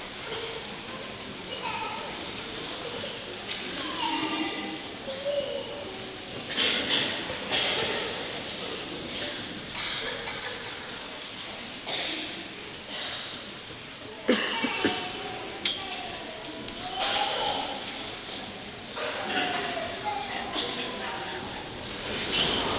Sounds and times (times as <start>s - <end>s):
Speech: 0.2s - 13.2s, 14.0s - 22.7s.